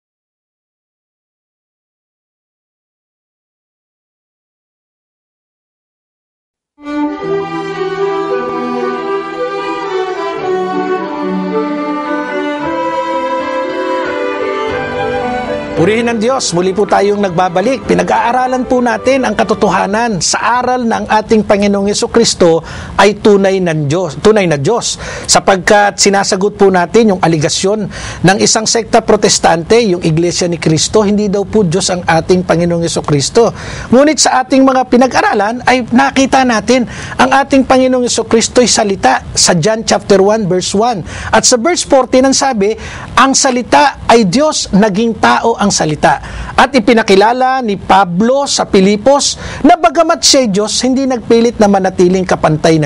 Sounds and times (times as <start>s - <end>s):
Speech: 15.8s - 52.8s.